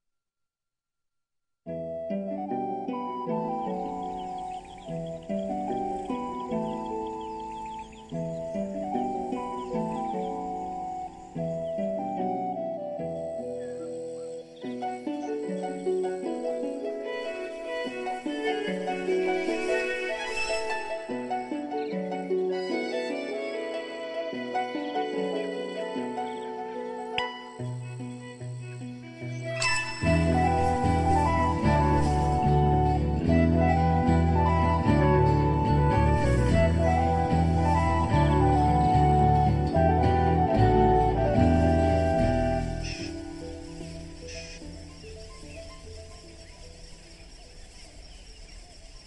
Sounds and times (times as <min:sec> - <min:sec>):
Music: 0:01.7 - 0:49.0.